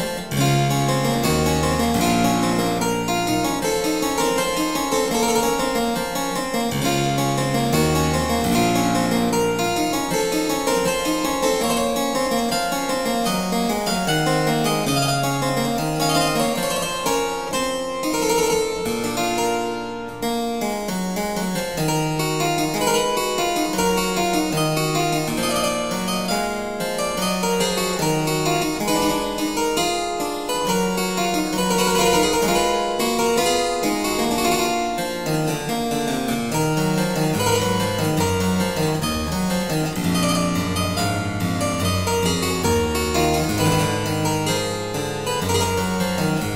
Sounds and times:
Classical music: 0:00.0 - 0:46.5
Piano: 0:00.0 - 0:46.5.

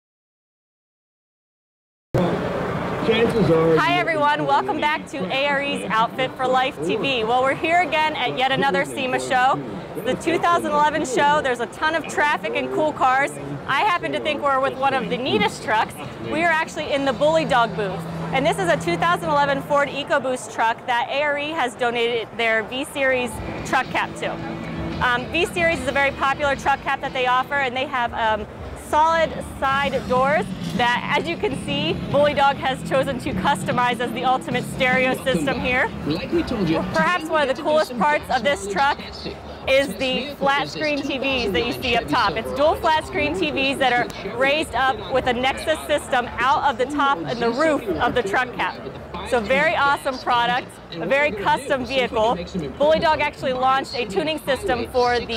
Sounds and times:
Vehicle: 0:02.2 - 0:55.3
Speech: 0:03.0 - 0:24.4, 0:25.0 - 0:55.3.

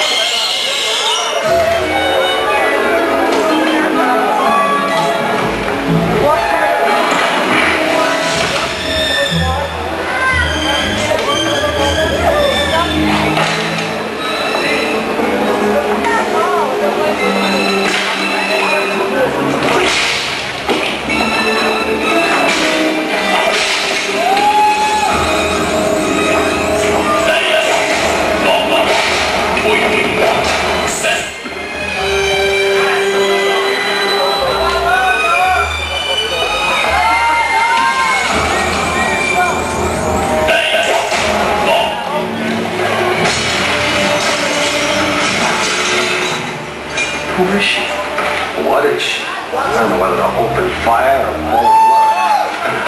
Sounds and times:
Music: 0:00.0 - 0:52.8.

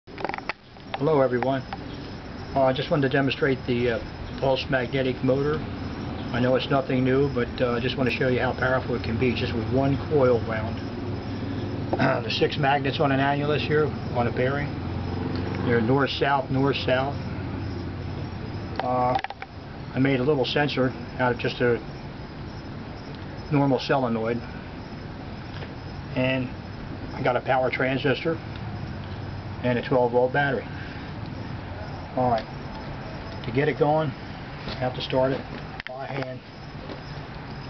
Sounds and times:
Outside, rural or natural: 0:00.0 - 0:37.6
Speech: 0:01.0 - 0:01.6, 0:02.6 - 0:05.6, 0:06.3 - 0:10.8, 0:12.0 - 0:14.7, 0:15.7 - 0:17.2, 0:18.8 - 0:19.2, 0:20.0 - 0:21.8, 0:23.5 - 0:24.4, 0:26.2 - 0:26.5, 0:27.2 - 0:28.4, 0:29.6 - 0:30.7, 0:32.2 - 0:32.5, 0:33.5 - 0:36.4.

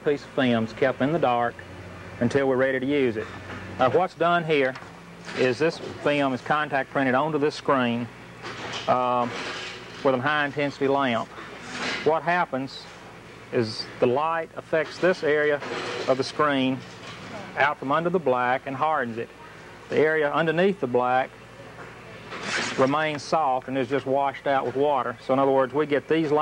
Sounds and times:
Speech: 0:00.0 - 0:01.6, 0:02.2 - 0:03.2, 0:03.8 - 0:04.8, 0:05.4 - 0:08.1, 0:08.9 - 0:09.4, 0:10.0 - 0:11.3, 0:12.0 - 0:12.9, 0:13.5 - 0:21.3, 0:22.8 - 0:26.4.

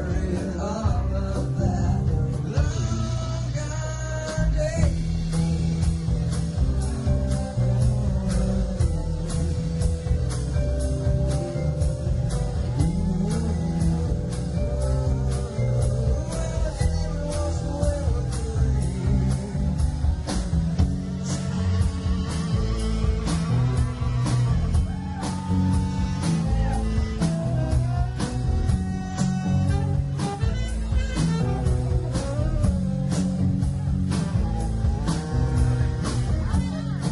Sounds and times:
Psychedelic rock: 0:00.0 - 0:37.1.

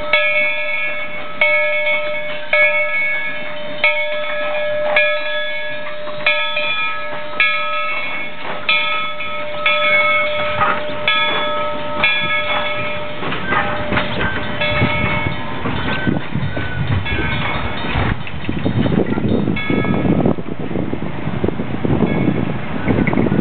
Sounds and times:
Railroad car, train wagon: 0:00.0 - 0:23.4
Train: 0:00.0 - 0:23.4.

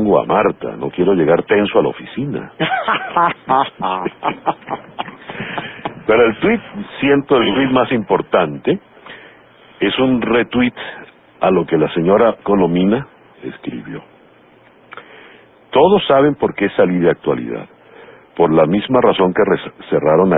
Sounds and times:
Speech: 0:00.0 - 0:02.6, 0:06.0 - 0:08.8, 0:09.8 - 0:14.1, 0:15.7 - 0:17.7, 0:18.4 - 0:20.3.

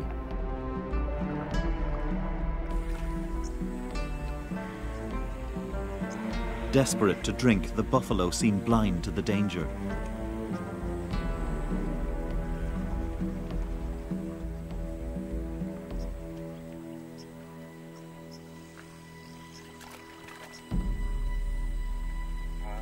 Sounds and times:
Music: 0:00.0 - 0:22.8
Speech: 0:06.7 - 0:09.7.

